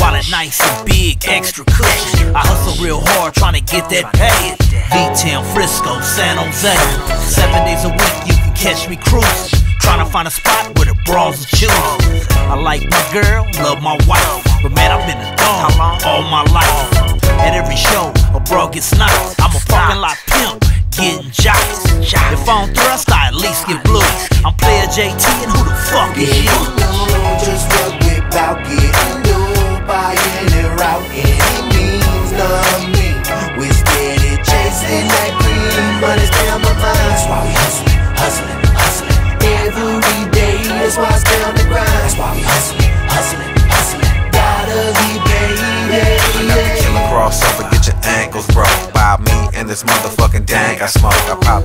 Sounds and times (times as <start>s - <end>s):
Music: 0.0s - 51.6s.